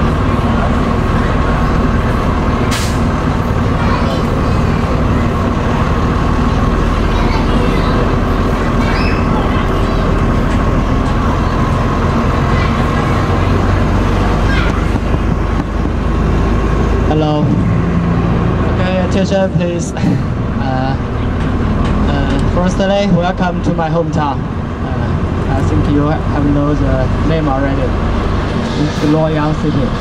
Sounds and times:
Vehicle: 0:00.0 - 0:30.0.

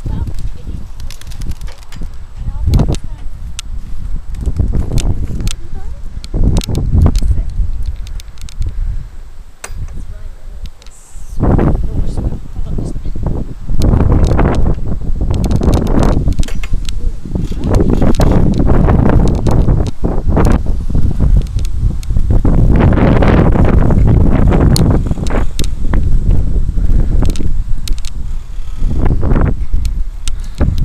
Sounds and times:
Outside, rural or natural: 0:00.0 - 0:30.8.

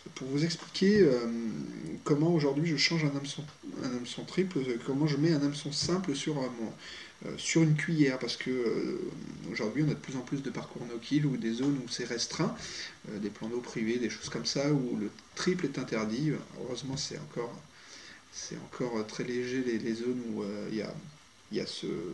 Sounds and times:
Speech: 0:00.0 - 0:17.7, 0:18.3 - 0:22.1.

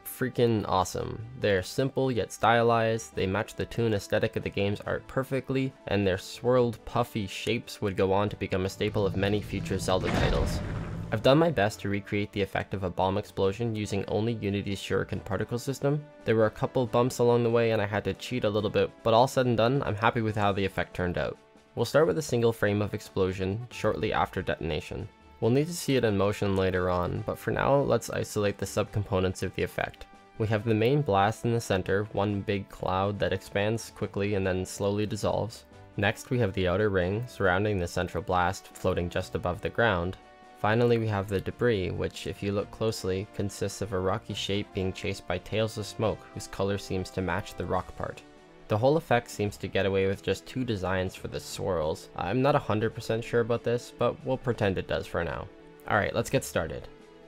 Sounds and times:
Speech: 0:00.0 - 0:56.9.

